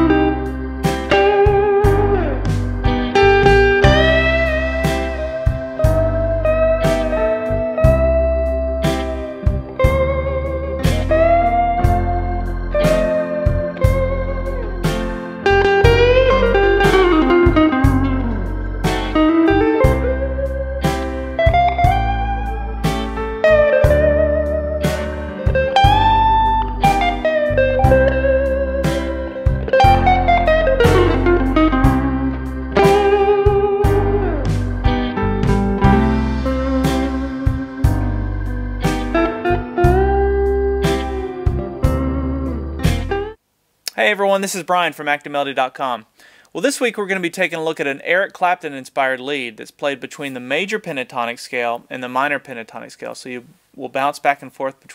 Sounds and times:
Electric guitar: 0:00.0 - 0:43.4
Strum: 0:00.0 - 0:43.4
Blues: 0:00.0 - 0:44.2.

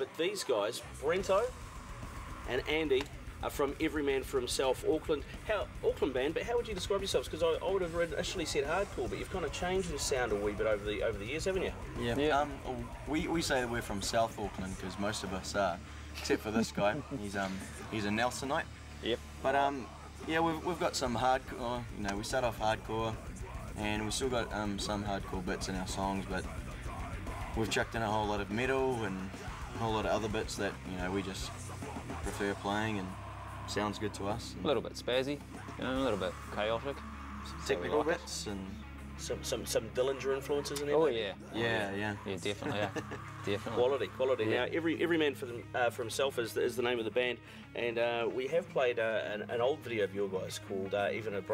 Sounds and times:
Speech: 0:00.0 - 0:01.5, 0:02.5 - 0:23.2, 0:23.8 - 0:26.6, 0:27.6 - 0:31.6, 0:32.2 - 0:37.0, 0:37.6 - 0:51.5
Background music: 0:00.0 - 0:51.5.

